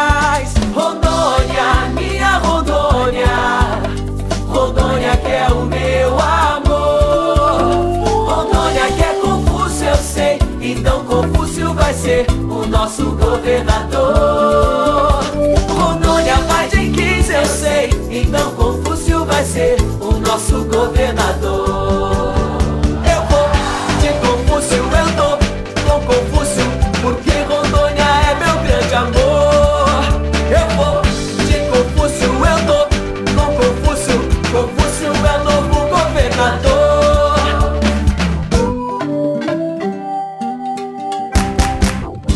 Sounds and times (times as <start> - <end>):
Jingle (music): 0.0 - 42.3.